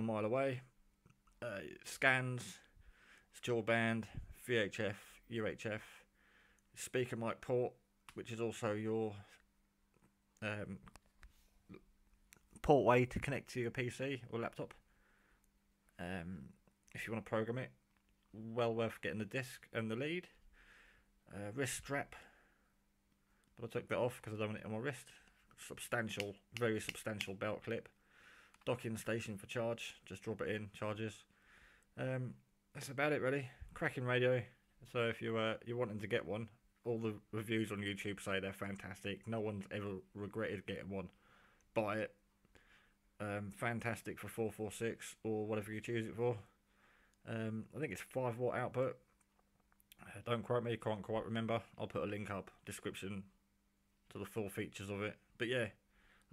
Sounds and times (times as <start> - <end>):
Speech: 0.0 - 0.8, 1.4 - 6.1, 6.8 - 9.4, 10.4 - 11.0, 12.6 - 14.8, 16.0 - 20.4, 21.3 - 22.4, 23.6 - 28.0, 28.6 - 31.3, 32.0 - 42.2, 43.2 - 46.6, 47.2 - 49.1, 49.9 - 53.4, 54.1 - 56.3
Inside, small room: 0.0 - 56.3.